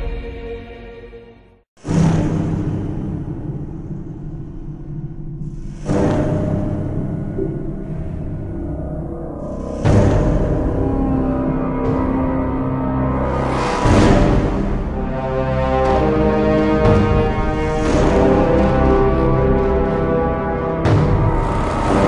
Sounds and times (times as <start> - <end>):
Soundtrack music: 5.4 - 22.0
Video game music: 9.6 - 22.0.